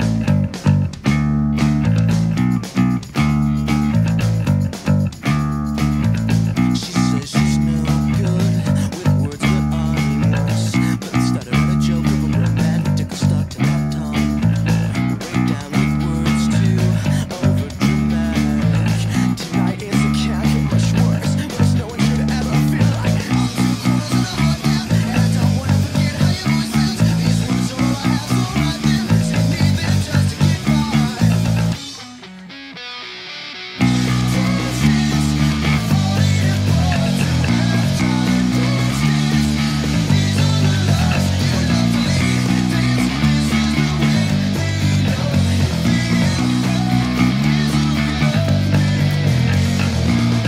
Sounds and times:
Bass guitar: 0:00.0 - 0:50.4.

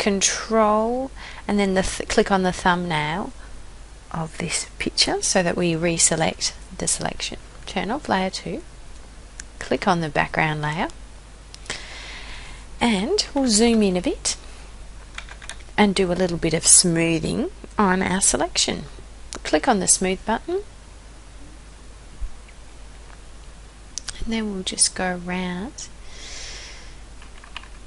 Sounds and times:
Speech: 0:00.0 - 0:03.4, 0:04.1 - 0:08.7, 0:09.6 - 0:11.0, 0:12.8 - 0:14.4, 0:15.8 - 0:20.7, 0:24.0 - 0:25.9.

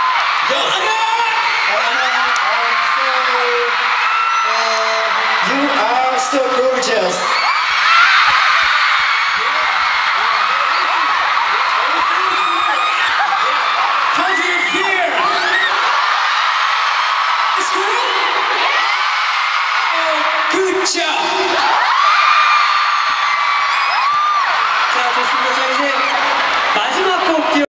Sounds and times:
Speech: 0:00.5 - 0:03.8, 0:04.5 - 0:07.4, 0:14.2 - 0:15.7, 0:17.6 - 0:18.4, 0:19.9 - 0:21.6, 0:24.9 - 0:26.2, 0:26.8 - 0:27.6.

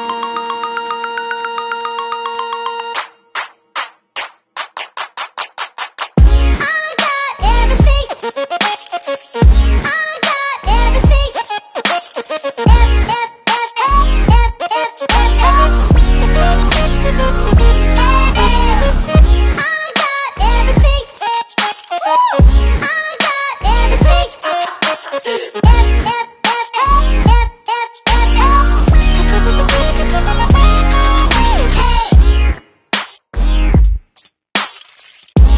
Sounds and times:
Music: 0:00.0 - 0:34.8, 0:35.4 - 0:35.5.

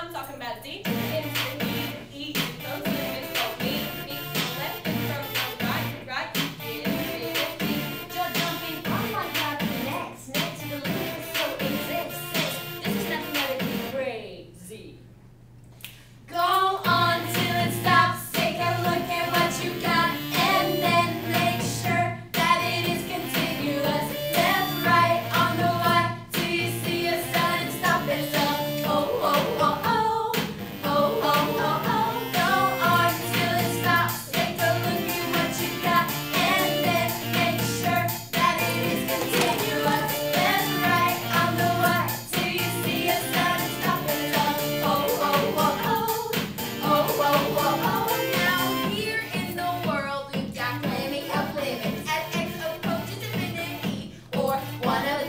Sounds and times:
Music: 0:00.0 - 0:14.1, 0:16.4 - 0:55.2
Speech: 0:00.0 - 0:15.1.

